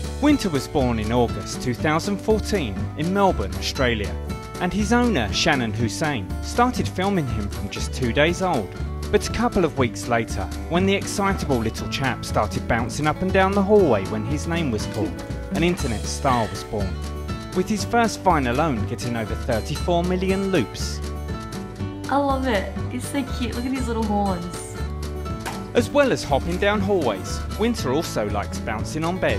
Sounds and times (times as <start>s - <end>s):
Music: 0.0s - 29.3s
Speech: 0.2s - 17.0s, 17.6s - 21.0s, 22.1s - 24.7s, 25.8s - 29.3s.